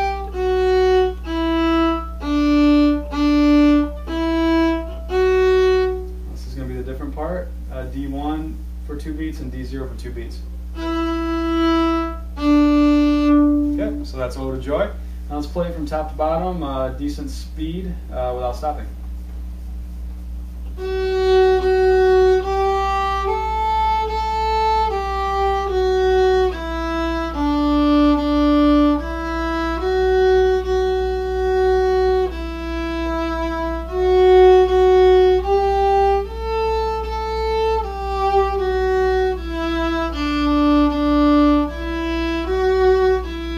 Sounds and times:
Violin, fiddle: 0.0s - 6.1s, 10.8s - 14.0s, 20.8s - 43.5s.

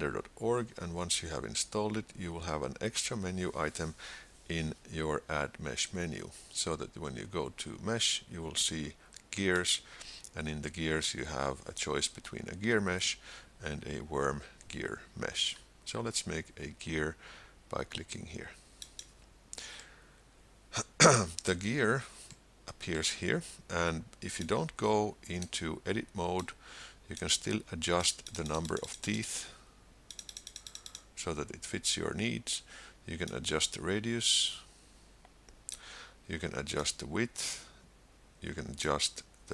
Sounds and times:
Speech: 0.0s - 18.6s, 20.8s - 29.6s, 31.2s - 34.7s, 36.3s - 37.7s, 38.4s - 39.5s.

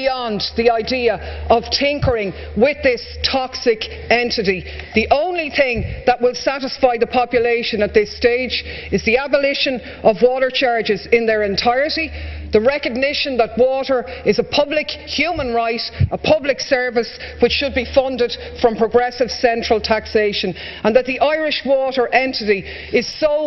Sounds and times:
Speech: 0.0s - 23.4s.

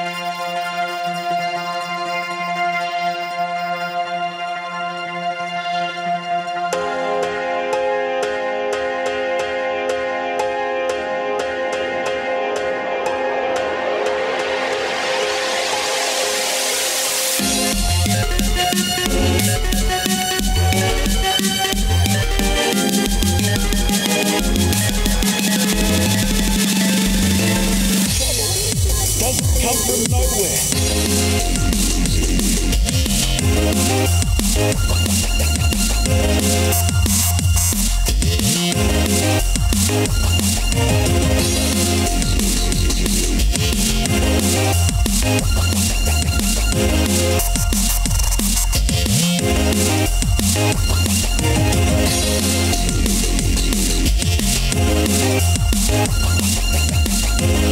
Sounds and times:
Dubstep: 0.0s - 4.0s, 14.0s - 57.7s
Techno: 0.0s - 7.0s, 11.8s - 57.7s.

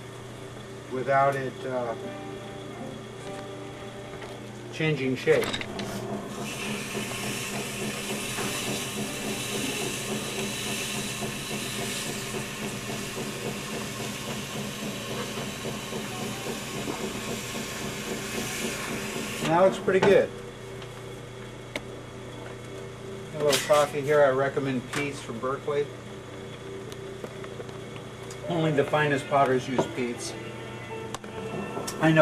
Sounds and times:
Speech: 4.8s - 5.5s, 23.4s - 25.9s, 28.4s - 30.4s.

